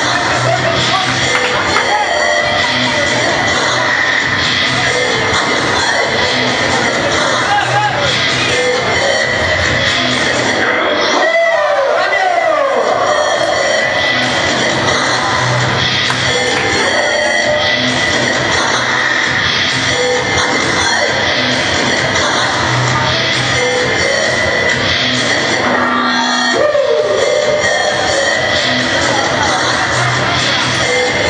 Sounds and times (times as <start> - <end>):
Speech: 0.0 - 4.0, 22.8 - 23.8
Music: 0.0 - 31.2.